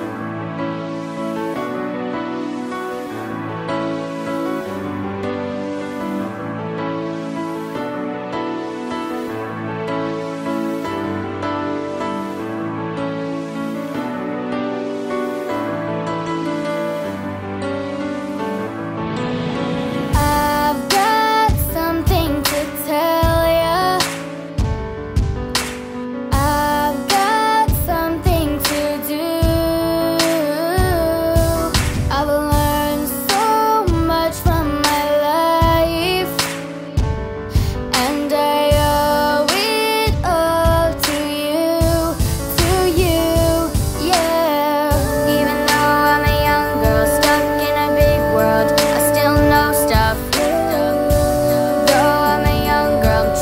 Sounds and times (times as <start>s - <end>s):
Rhythm and blues: 0.0s - 53.4s
Blues: 19.6s - 53.4s.